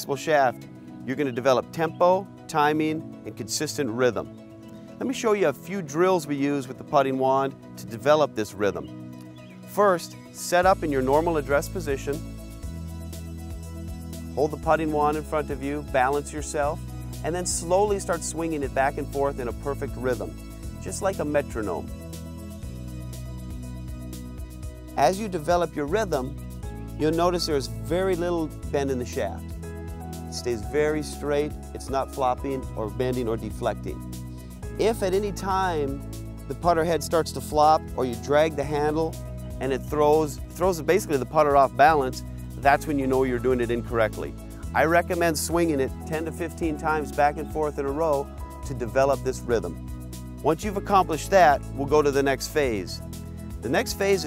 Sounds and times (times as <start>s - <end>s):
Speech: 0.0s - 4.3s, 5.0s - 8.9s, 9.8s - 12.2s, 14.4s - 21.8s, 25.0s - 26.3s, 27.0s - 29.4s, 30.3s - 34.0s, 34.8s - 49.8s, 50.4s - 53.0s, 53.6s - 54.2s
Music: 0.0s - 54.2s.